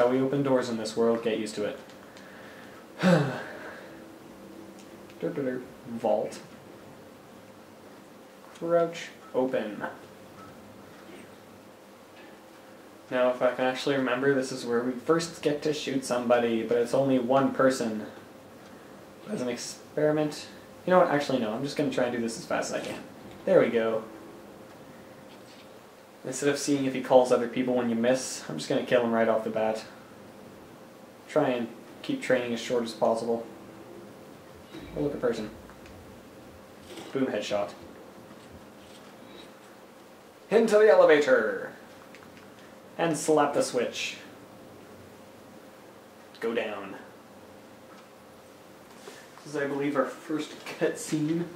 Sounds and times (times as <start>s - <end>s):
Speech: 0.0s - 1.9s, 5.2s - 6.6s, 8.5s - 10.0s, 13.1s - 18.2s, 19.2s - 24.1s, 26.2s - 30.0s, 31.3s - 33.5s, 34.7s - 35.6s, 36.9s - 37.9s, 40.5s - 41.9s, 43.0s - 44.4s, 46.4s - 47.2s, 49.4s - 51.5s
Inside, small room: 0.0s - 51.5s.